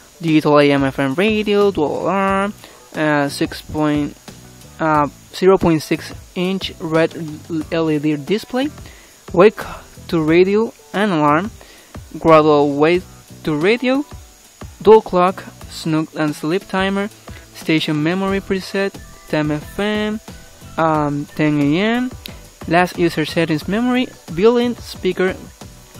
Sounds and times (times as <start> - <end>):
Music: 0.0 - 26.0
Speech: 0.2 - 4.2, 4.8 - 11.5, 12.2 - 14.1, 14.8 - 20.2, 20.8 - 22.1, 22.7 - 25.5.